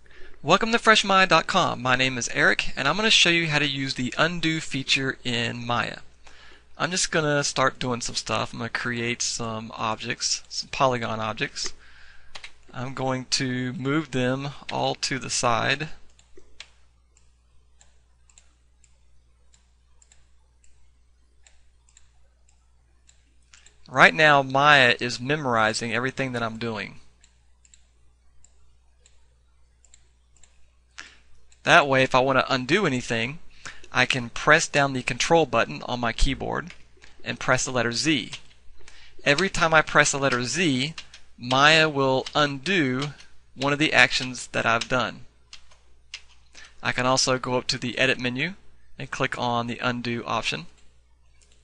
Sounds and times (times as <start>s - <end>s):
Speech: 0.4s - 6.1s, 6.8s - 11.8s, 12.7s - 16.0s, 23.9s - 27.1s, 31.6s - 38.4s, 39.2s - 45.3s, 46.8s - 50.8s.